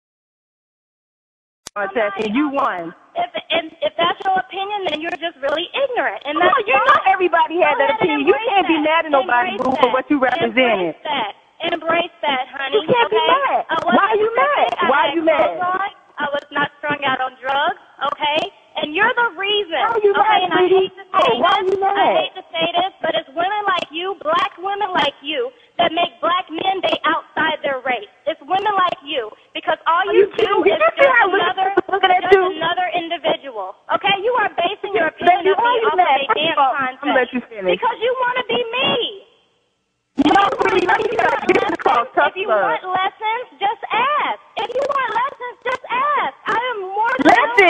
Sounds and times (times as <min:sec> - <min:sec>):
Speech: 0:01.7 - 0:39.3, 0:40.2 - 0:47.7.